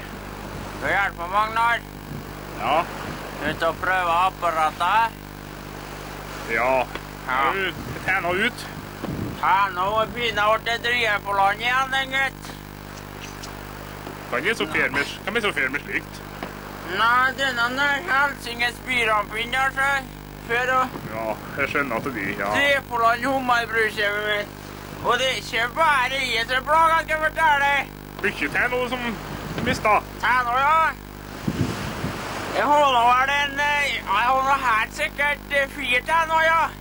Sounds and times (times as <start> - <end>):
Speech: 0.8 - 1.9, 2.6 - 5.2, 6.5 - 8.8, 9.4 - 12.6, 14.3 - 16.2, 16.9 - 31.0, 32.5 - 36.8.